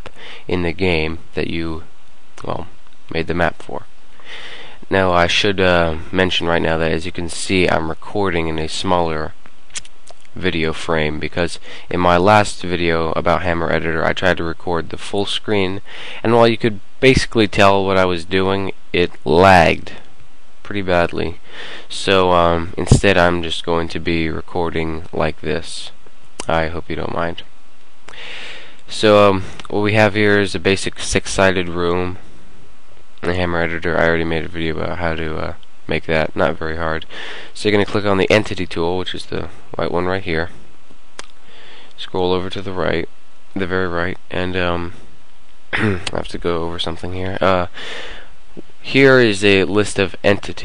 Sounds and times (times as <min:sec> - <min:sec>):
Speech: 0:00.0 - 0:03.9, 0:04.8 - 0:27.5, 0:28.9 - 0:32.3, 0:33.2 - 0:40.6, 0:42.0 - 0:45.0, 0:45.8 - 0:47.8, 0:48.8 - 0:50.6.